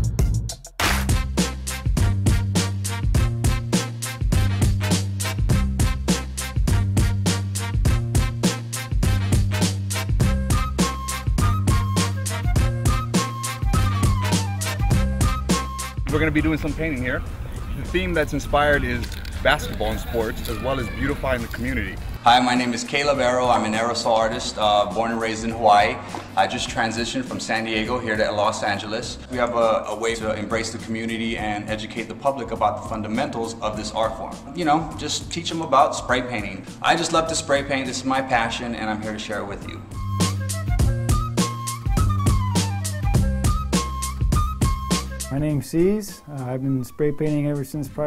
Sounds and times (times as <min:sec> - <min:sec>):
Music: 0:00.0 - 0:48.0
Speech: 0:16.1 - 0:17.2, 0:17.8 - 0:39.8, 0:45.3 - 0:48.0.